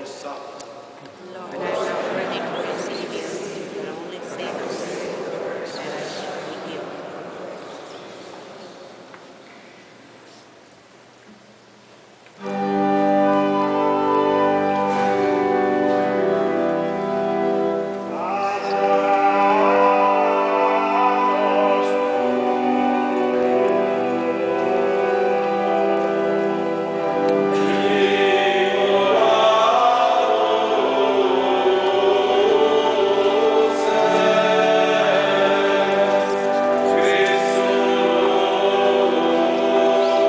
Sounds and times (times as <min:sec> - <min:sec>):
Mantra: 0:18.2 - 0:22.5, 0:27.5 - 0:40.2.